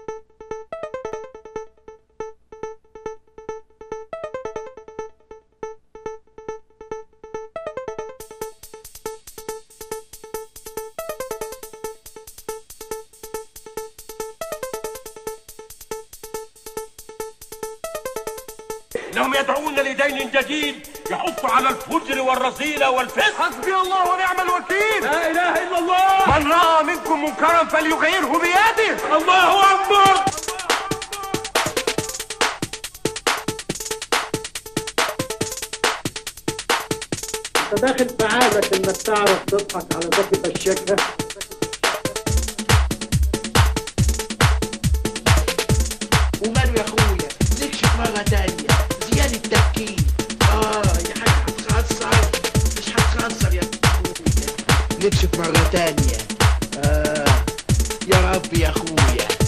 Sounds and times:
Techno: 0:07.7 - 0:59.4.

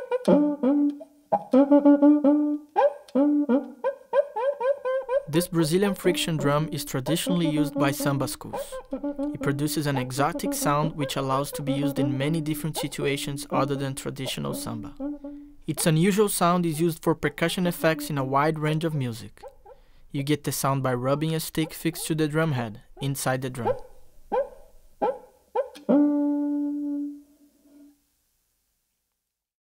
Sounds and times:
Speech: 0:05.3 - 0:15.0, 0:15.7 - 0:19.4, 0:20.2 - 0:23.8.

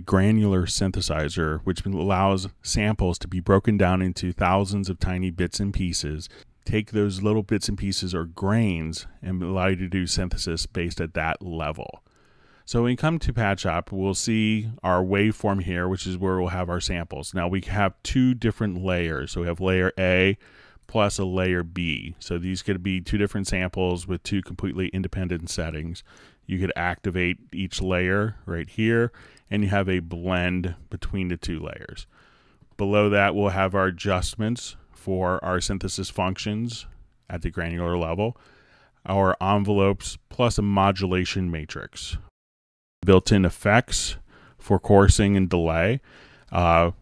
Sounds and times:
Speech: 0:00.0 - 0:12.0, 0:12.7 - 0:32.1, 0:32.8 - 0:38.4, 0:39.0 - 0:42.3, 0:43.0 - 0:47.0.

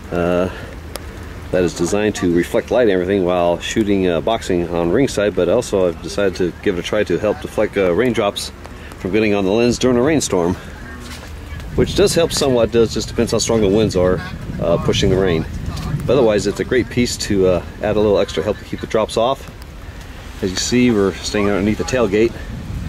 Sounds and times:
Rain: 0:00.0 - 0:22.8.

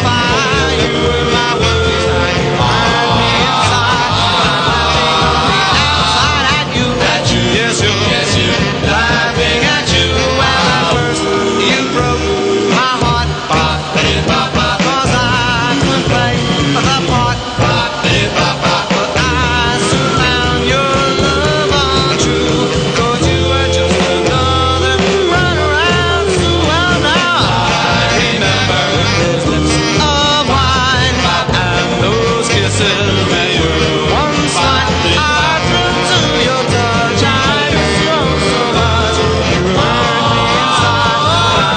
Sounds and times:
Music: 0:00.0 - 0:41.7.

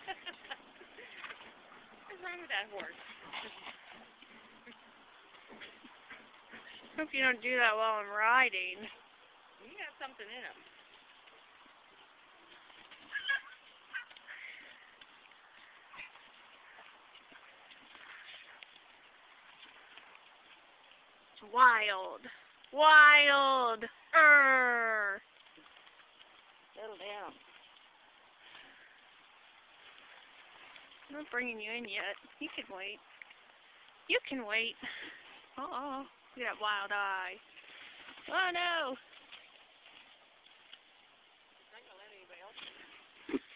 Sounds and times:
Clip-clop: 0:00.0 - 0:07.9, 0:08.7 - 0:22.8, 0:25.0 - 0:43.5
Neigh, whinny: 0:13.1 - 0:13.6.

